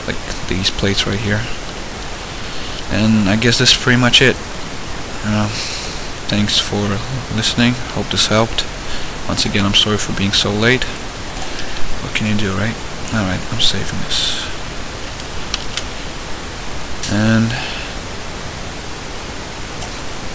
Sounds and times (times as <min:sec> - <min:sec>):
Speech: 0:00.0 - 0:01.6, 0:02.9 - 0:04.4, 0:05.2 - 0:05.6, 0:06.3 - 0:08.7, 0:09.3 - 0:11.0, 0:12.0 - 0:14.6, 0:17.0 - 0:17.9
Pink noise: 0:00.0 - 0:20.3.